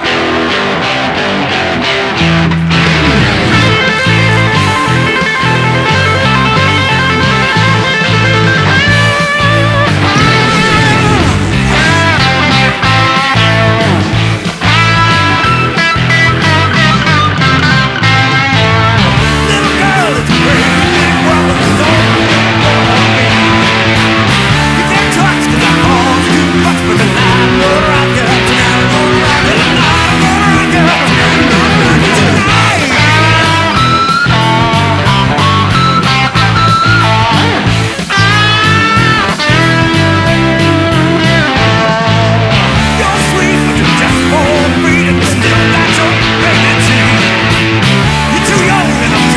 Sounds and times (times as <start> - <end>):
Electric guitar: 0.0 - 49.3
Strum: 8.9 - 15.4.